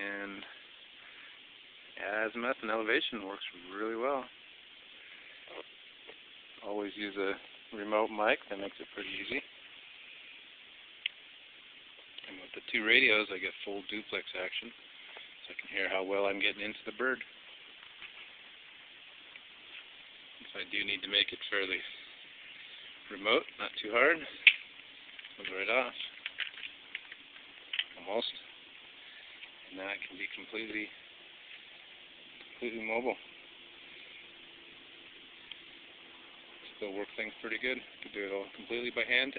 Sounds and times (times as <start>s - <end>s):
Speech: 0.0s - 0.6s, 2.0s - 4.4s, 6.6s - 9.5s, 12.2s - 14.8s, 15.4s - 17.3s, 20.4s - 22.0s, 23.1s - 24.4s, 25.4s - 26.1s, 28.0s - 28.5s, 29.7s - 31.0s, 32.6s - 33.2s, 36.7s - 39.3s.